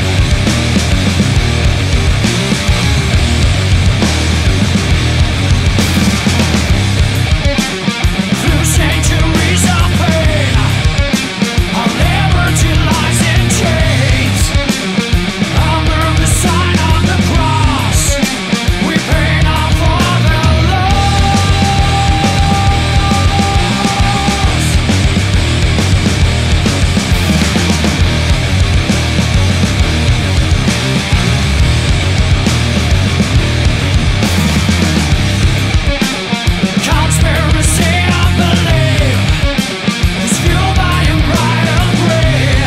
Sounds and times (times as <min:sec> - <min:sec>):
Music: 0:00.0 - 0:42.6.